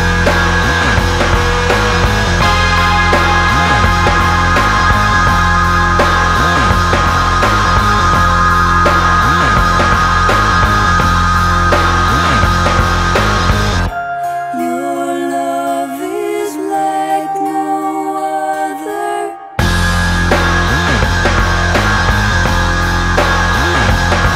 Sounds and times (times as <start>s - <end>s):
Music: 0.0s - 24.3s.